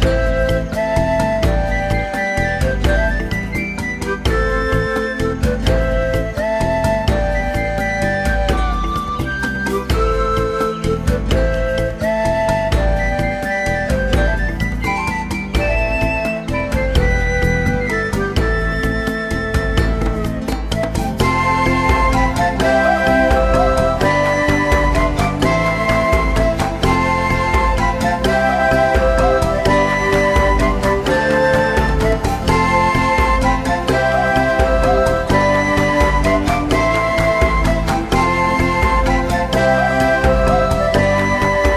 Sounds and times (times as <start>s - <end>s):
Music: 0.0s - 41.7s.